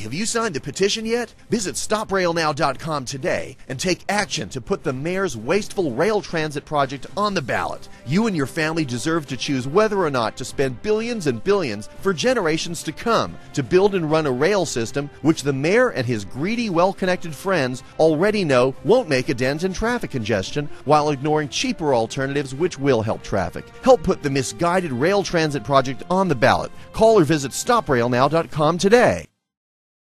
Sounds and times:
Speech: 0.0 - 29.3
Music: 0.0 - 29.6.

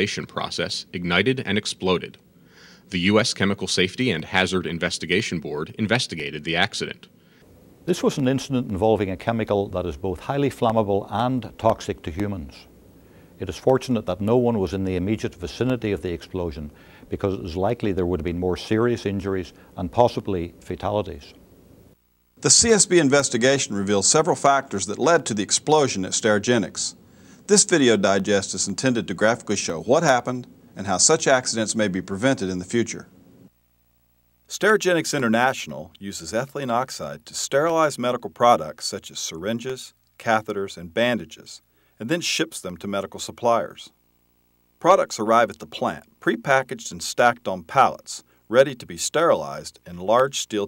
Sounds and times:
Speech: 0.0 - 2.2, 2.9 - 7.1, 7.9 - 12.7, 13.4 - 21.4, 22.4 - 33.1, 34.5 - 44.0, 44.8 - 50.6.

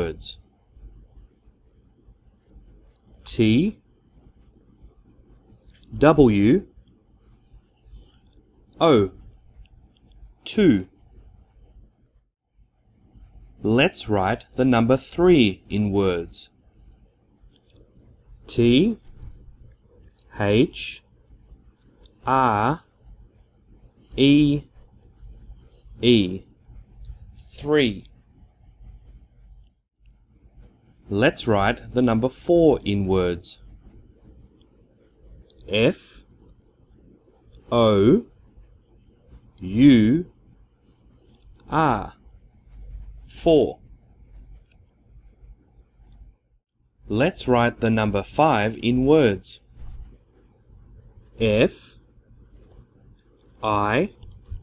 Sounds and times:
Speech: 0.0 - 0.4, 3.2 - 3.8, 5.8 - 6.8, 8.8 - 9.2, 10.4 - 10.9, 13.6 - 16.6, 18.5 - 19.0, 20.2 - 21.1, 22.2 - 22.9, 24.1 - 24.7, 26.0 - 26.5, 27.4 - 28.1, 31.1 - 33.6, 35.6 - 36.3, 37.6 - 38.3, 39.6 - 40.3, 41.6 - 42.2, 43.2 - 43.8, 47.1 - 49.6, 51.4 - 52.0, 53.6 - 54.6.

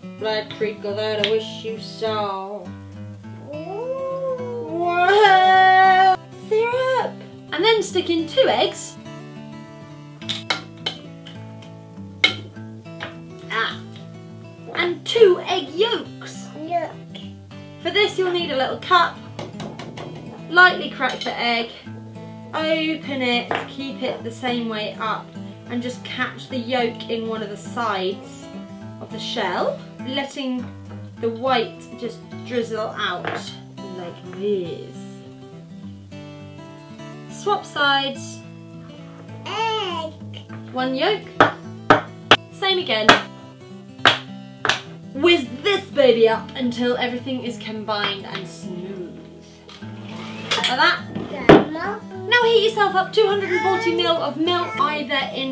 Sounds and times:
Child speech, kid speaking: 3.5 - 5.7, 14.9 - 17.1, 39.4 - 40.2, 51.2 - 55.5.

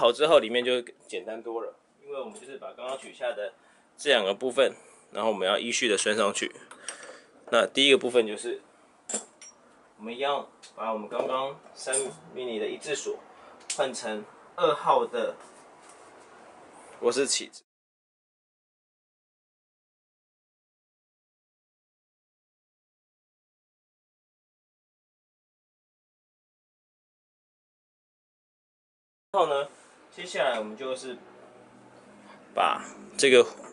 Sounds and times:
Speech: 0.0 - 6.6, 7.5 - 8.6, 10.0 - 13.2, 13.8 - 15.4, 17.0 - 17.7, 29.4 - 31.2, 32.6 - 33.7.

